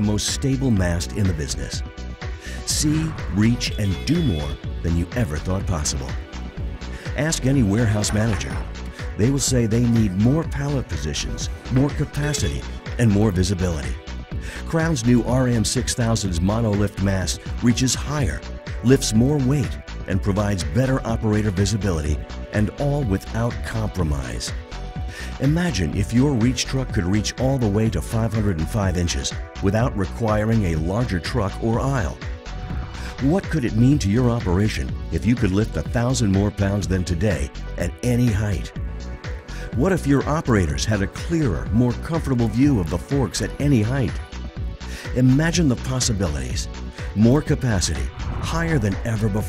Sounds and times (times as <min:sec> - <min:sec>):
Speech: 0:00.0 - 0:01.8, 0:02.6 - 0:06.2, 0:07.1 - 0:14.0, 0:14.7 - 0:24.5, 0:25.4 - 0:32.2, 0:33.2 - 0:38.7, 0:39.7 - 0:44.2, 0:45.1 - 0:49.4
Music: 0:00.0 - 0:49.4.